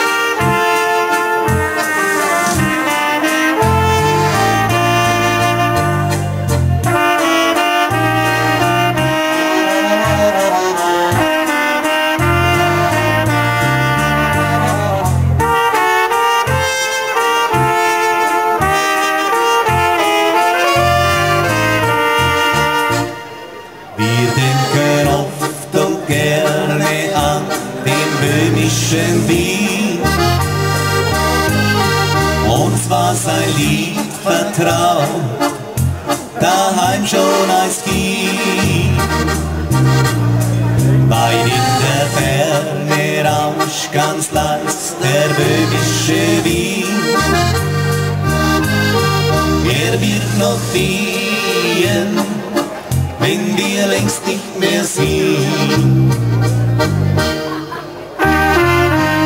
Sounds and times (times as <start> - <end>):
Music: 0.0 - 59.2.